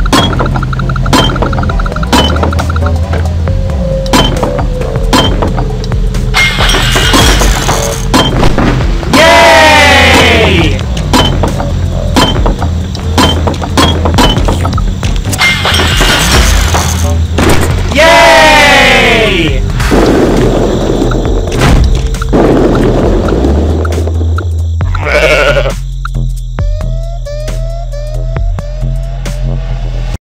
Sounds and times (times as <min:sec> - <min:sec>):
Music: 0:00.0 - 0:30.2.